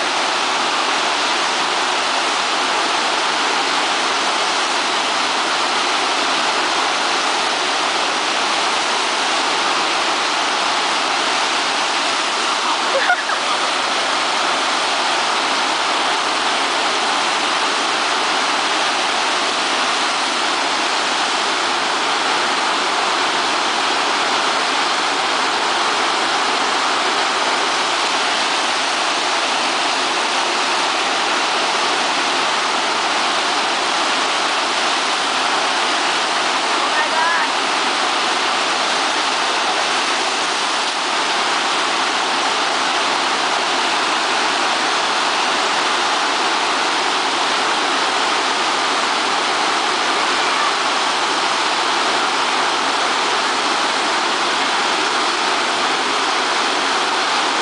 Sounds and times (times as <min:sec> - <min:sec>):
Waterfall: 0:00.0 - 0:57.6.